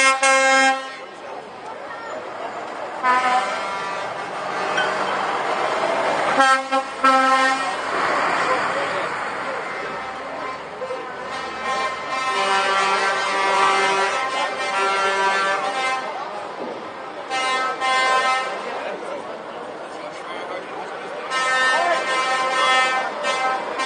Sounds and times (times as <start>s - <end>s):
Vehicle: 0.0s - 23.8s.